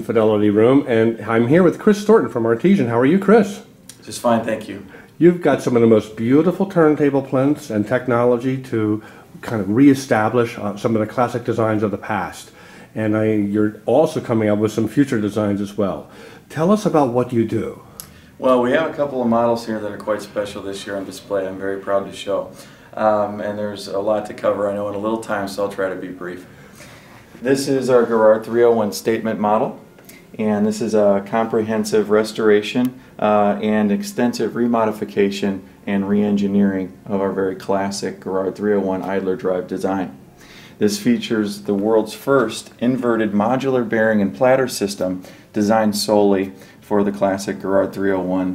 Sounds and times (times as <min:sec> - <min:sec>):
Speech: 0:00.0 - 0:26.5, 0:27.4 - 0:29.8, 0:30.4 - 0:40.2, 0:40.8 - 0:48.5.